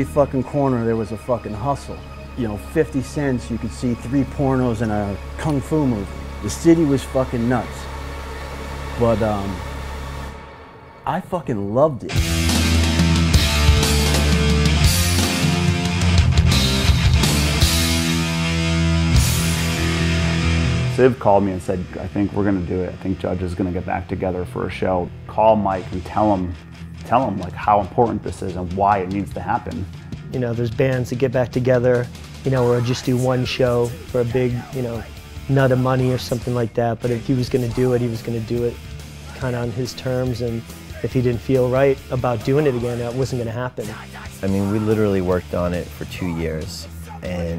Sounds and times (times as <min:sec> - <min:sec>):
Speech: 0:00.0 - 0:07.8, 0:09.0 - 0:09.6, 0:11.1 - 0:12.2, 0:21.0 - 0:47.5
Punk rock: 0:12.2 - 0:20.9.